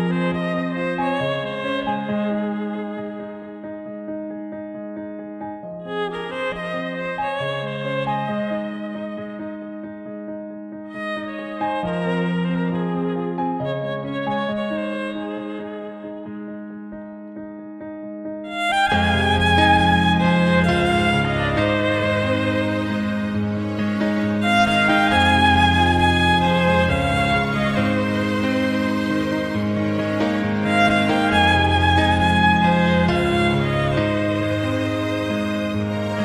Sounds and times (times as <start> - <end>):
Violin, fiddle: 0.0 - 4.0, 5.8 - 9.9, 10.9 - 16.4, 18.5 - 36.2.